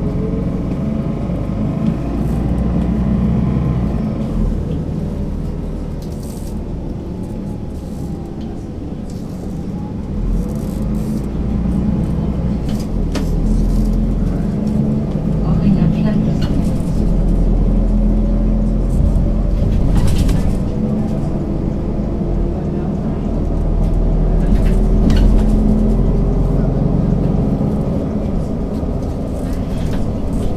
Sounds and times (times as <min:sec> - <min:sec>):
Vehicle: 0:00.0 - 0:30.5
Speech: 0:15.3 - 0:17.3, 0:22.4 - 0:23.5.